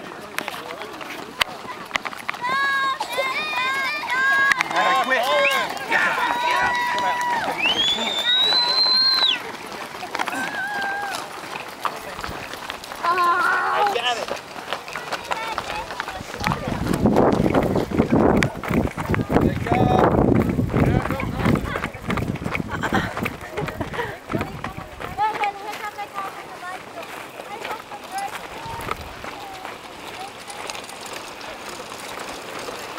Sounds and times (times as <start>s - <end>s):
Run: 0.0s - 32.9s.